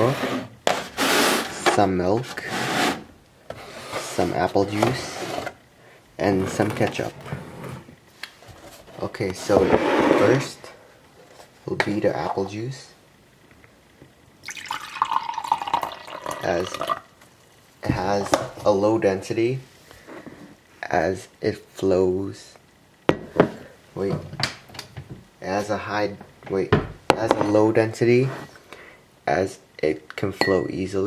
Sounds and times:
Speech: 0:01.6 - 0:02.5, 0:04.0 - 0:05.2, 0:06.2 - 0:07.2, 0:09.0 - 0:10.8, 0:11.6 - 0:13.0, 0:16.4 - 0:16.9, 0:17.8 - 0:19.7, 0:20.8 - 0:22.6, 0:24.0 - 0:24.3, 0:25.4 - 0:28.4, 0:29.3 - 0:31.0
Liquid: 0:14.4 - 0:17.1.

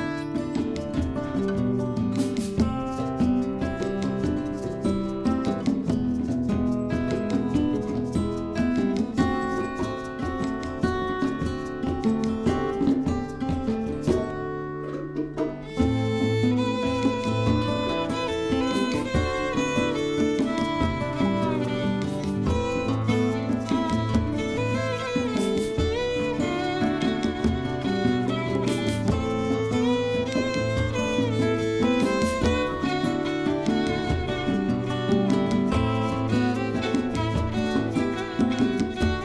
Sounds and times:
Music: 0:00.0 - 0:39.2.

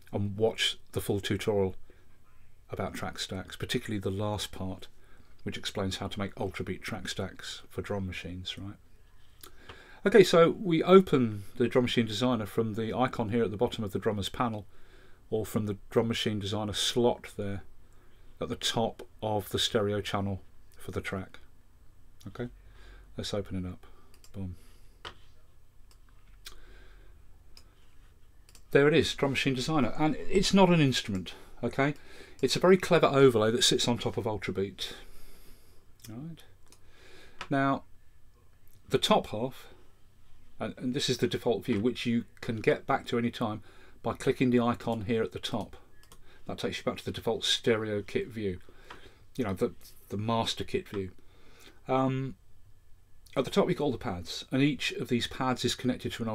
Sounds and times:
Speech: 0:00.1 - 0:08.8, 0:10.0 - 0:14.7, 0:15.3 - 0:17.7, 0:18.4 - 0:21.5, 0:22.2 - 0:22.6, 0:23.2 - 0:24.6, 0:28.7 - 0:35.1, 0:36.0 - 0:36.6, 0:37.5 - 0:37.9, 0:38.8 - 0:39.8, 0:40.6 - 0:45.9, 0:46.5 - 0:48.7, 0:49.4 - 0:51.2, 0:51.9 - 0:52.4, 0:53.3 - 0:56.3.

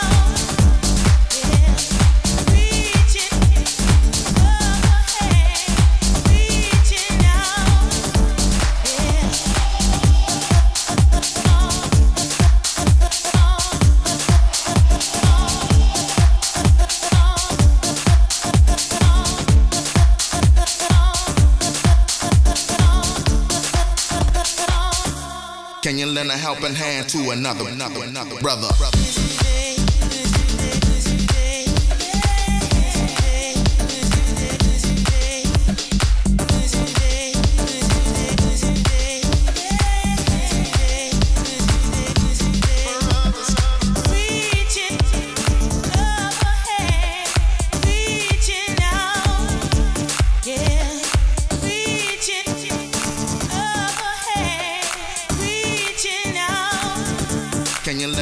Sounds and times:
Disco: 0:00.0 - 0:58.2.

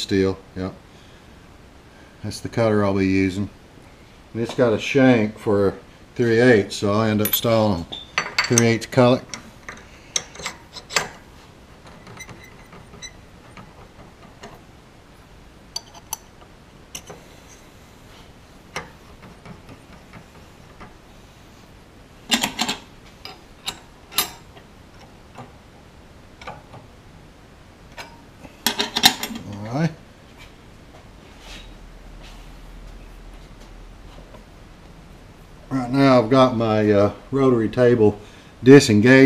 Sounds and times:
Speech: 0:00.0 - 0:00.8, 0:02.2 - 0:03.6, 0:04.4 - 0:09.3, 0:29.4 - 0:30.0, 0:35.7 - 0:39.2.

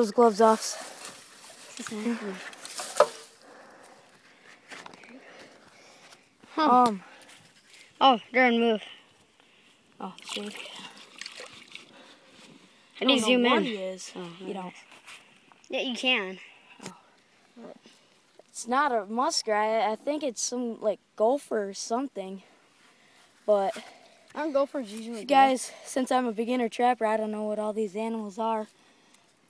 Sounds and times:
Speech: 0:00.0 - 0:00.8, 0:13.0 - 0:14.7, 0:23.5 - 0:23.8, 0:24.4 - 0:28.7
Outside, rural or natural: 0:00.0 - 0:29.5.

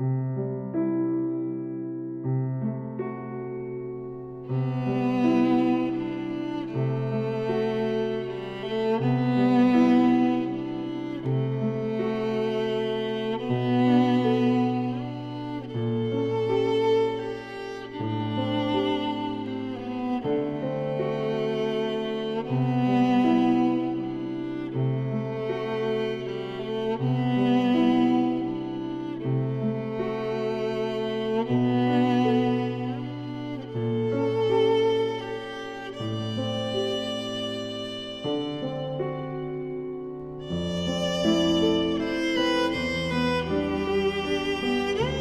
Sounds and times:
Music: 0:00.0 - 0:45.2.

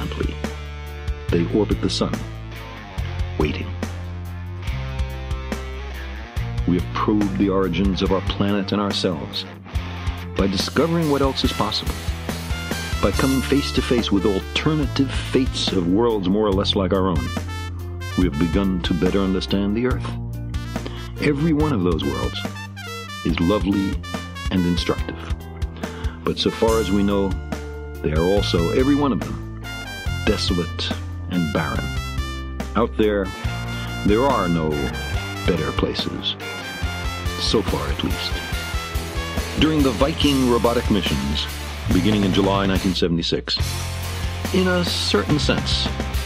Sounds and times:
Speech: 0:00.0 - 0:00.5, 0:01.3 - 0:02.3, 0:03.4 - 0:03.8, 0:06.6 - 0:09.6, 0:10.4 - 0:12.0, 0:13.0 - 0:17.4, 0:18.1 - 0:20.2, 0:21.2 - 0:22.5, 0:23.2 - 0:25.4, 0:26.2 - 0:27.4, 0:28.0 - 0:29.4, 0:30.2 - 0:32.0, 0:32.8 - 0:33.4, 0:34.0 - 0:36.4, 0:37.4 - 0:38.5, 0:39.6 - 0:43.6, 0:44.5 - 0:46.0
Music: 0:00.0 - 0:46.2.

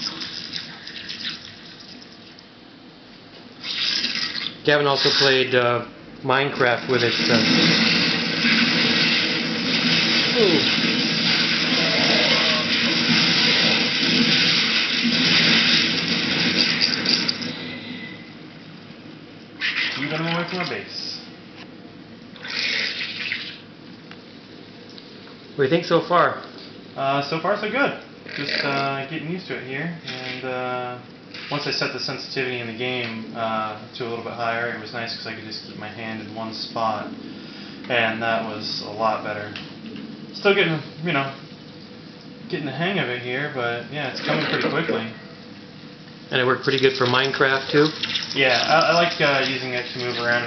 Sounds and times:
Speech: 0:04.6 - 0:07.6, 0:20.0 - 0:21.3, 0:25.6 - 0:37.1, 0:37.9 - 0:39.6, 0:40.4 - 0:41.4, 0:42.5 - 0:45.2, 0:46.3 - 0:50.4.

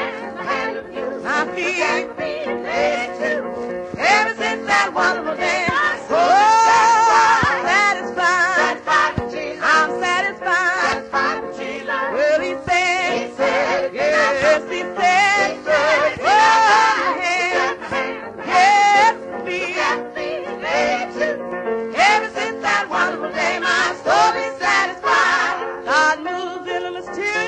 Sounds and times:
Choir: 0:00.0 - 0:27.4.

